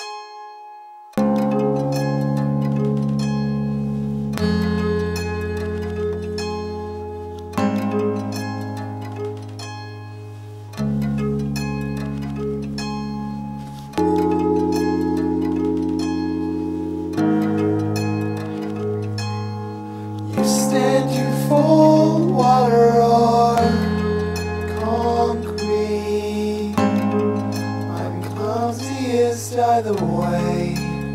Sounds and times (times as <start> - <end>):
Music: 0.0 - 31.1.